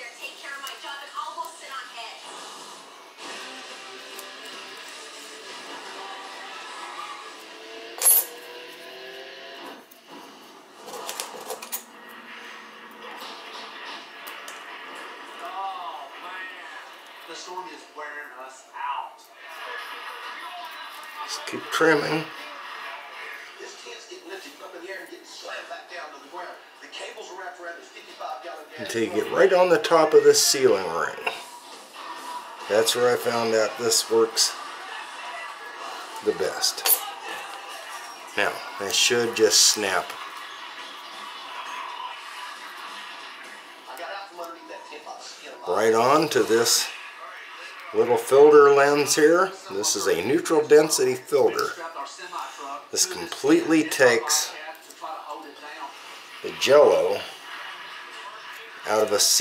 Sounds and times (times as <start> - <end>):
Speech: 20.3 - 22.5, 23.6 - 31.4, 32.7 - 34.6, 38.4 - 40.2, 43.9 - 47.0, 47.8 - 57.3, 58.6 - 59.4.